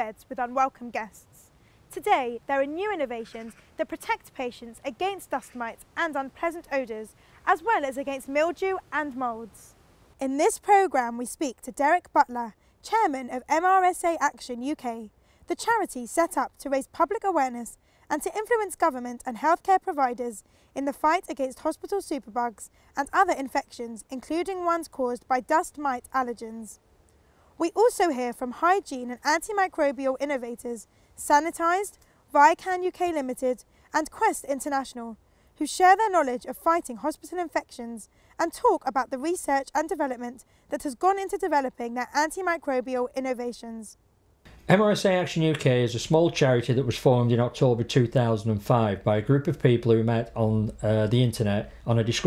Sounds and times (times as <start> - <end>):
Speech: 0.0 - 1.2, 1.9 - 9.6, 10.2 - 26.8, 27.6 - 44.0, 44.7 - 52.2.